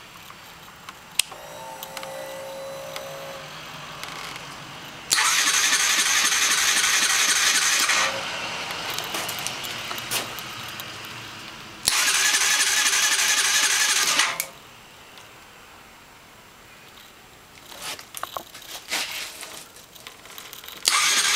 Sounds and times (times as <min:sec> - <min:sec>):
Motorcycle: 0:01.2 - 0:14.5, 0:20.8 - 0:21.3.